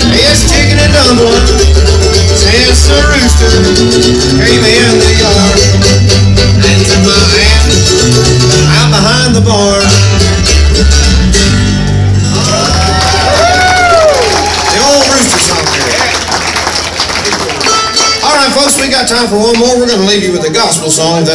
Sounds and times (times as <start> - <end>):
Bluegrass: 0.0 - 21.3
Inside, public space: 0.0 - 21.3
Speech: 14.7 - 16.2, 18.2 - 21.3.